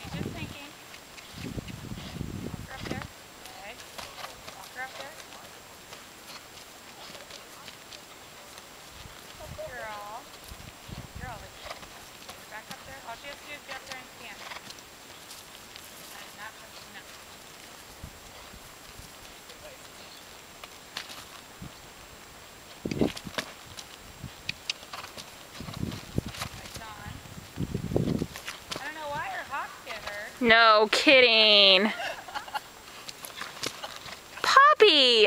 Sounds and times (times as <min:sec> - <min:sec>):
Clip-clop: 0:00.0 - 0:35.2.